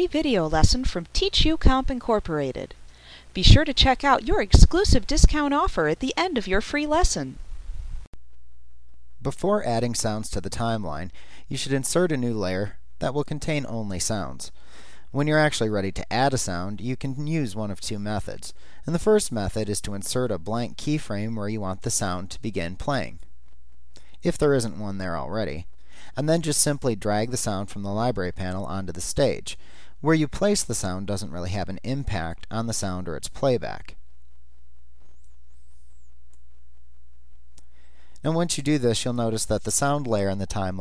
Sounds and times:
Speech: 0:00.0 - 0:02.8, 0:03.4 - 0:07.4, 0:09.2 - 0:14.5, 0:15.1 - 0:23.2, 0:24.2 - 0:34.0, 0:38.2 - 0:40.8.

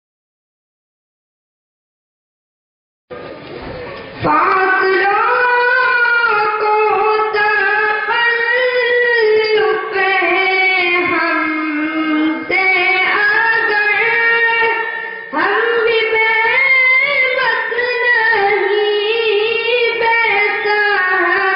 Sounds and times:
Inside, large room or hall: 0:03.1 - 0:21.5.

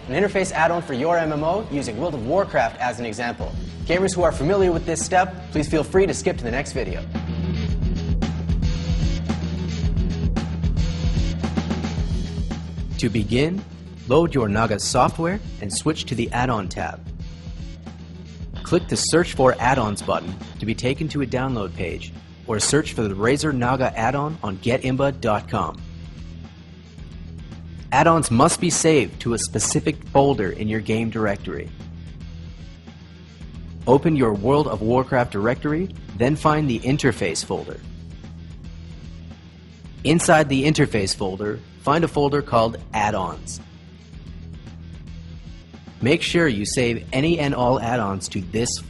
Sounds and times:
Music: 0:00.0 - 0:48.8
Speech: 0:00.1 - 0:07.1, 0:13.0 - 0:17.0, 0:18.6 - 0:25.8, 0:27.9 - 0:31.7, 0:33.9 - 0:37.9, 0:40.1 - 0:43.6, 0:46.0 - 0:48.8.

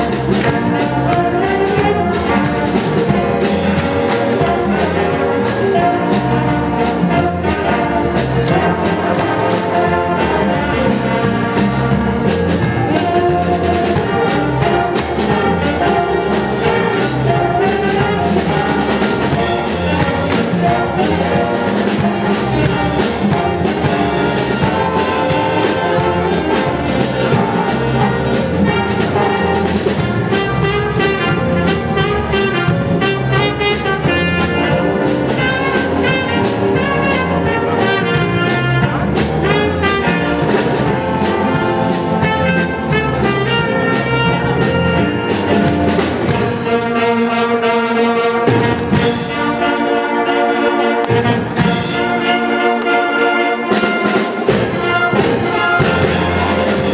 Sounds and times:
Orchestra: 0:00.0 - 0:56.9.

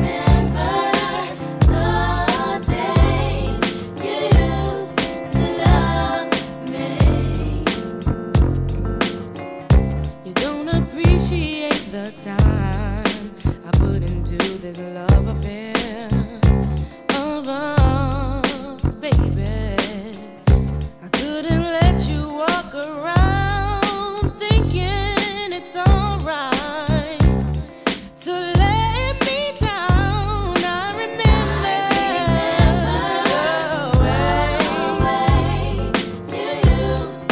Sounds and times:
Blues: 0:00.0 - 0:37.3
Rhythm and blues: 0:00.0 - 0:37.3.

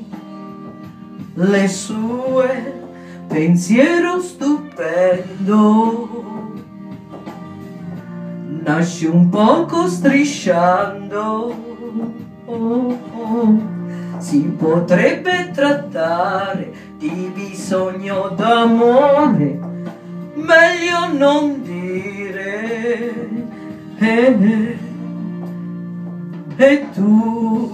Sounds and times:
Music: 0:00.0 - 0:27.7.

